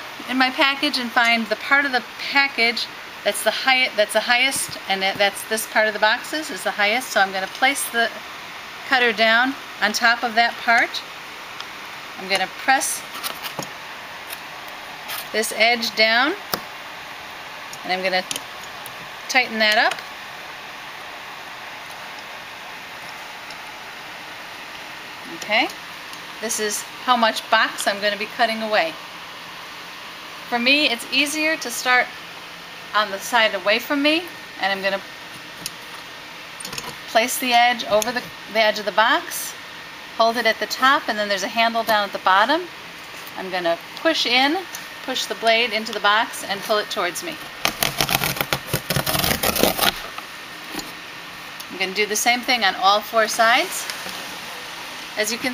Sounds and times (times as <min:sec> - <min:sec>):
Speech: 0:00.3 - 0:08.2, 0:08.9 - 0:11.0, 0:12.2 - 0:13.0, 0:15.4 - 0:16.4, 0:17.8 - 0:18.3, 0:19.3 - 0:20.0, 0:25.2 - 0:25.8, 0:26.4 - 0:29.0, 0:30.5 - 0:32.1, 0:33.0 - 0:35.0, 0:37.1 - 0:39.6, 0:40.2 - 0:42.7, 0:43.4 - 0:47.4, 0:51.7 - 0:53.9, 0:55.2 - 0:55.5.